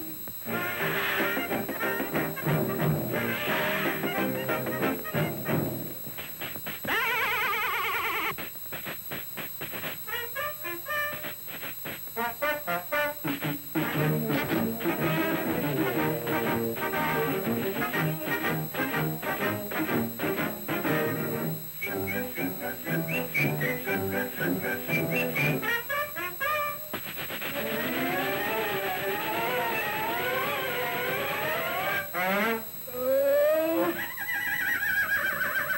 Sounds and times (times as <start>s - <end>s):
Music: 0.0s - 6.0s, 10.1s - 11.4s, 12.2s - 32.6s.